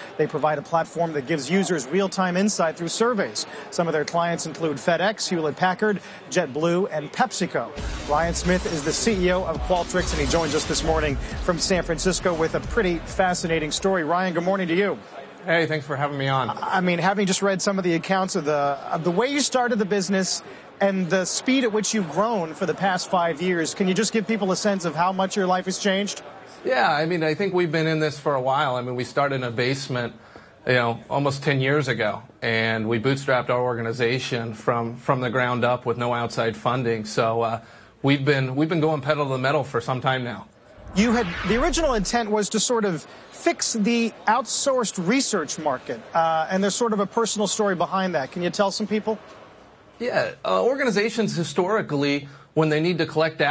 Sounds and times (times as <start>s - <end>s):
Speech: 0.0s - 49.2s, 50.0s - 53.5s.